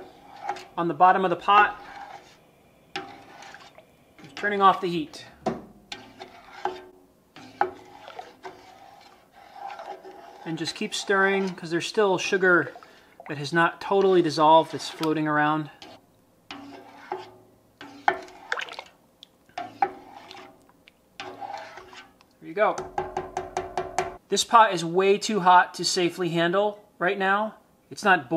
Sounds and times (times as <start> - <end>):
Speech: 0.8 - 1.8, 4.4 - 5.4, 10.4 - 12.7, 13.3 - 15.8, 22.4 - 22.8, 24.3 - 28.3.